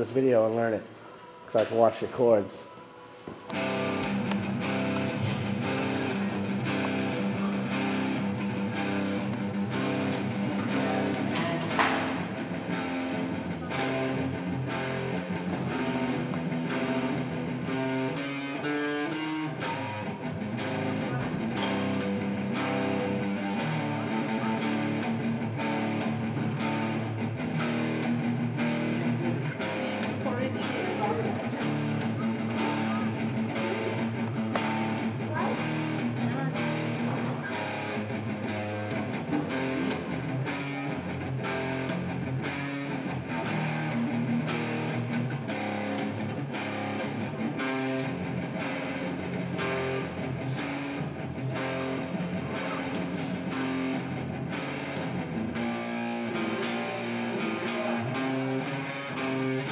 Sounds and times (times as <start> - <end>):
Speech: 0.0 - 0.9, 1.5 - 2.7, 20.8 - 21.6, 30.2 - 33.2, 35.2 - 37.1
Music: 0.0 - 59.7.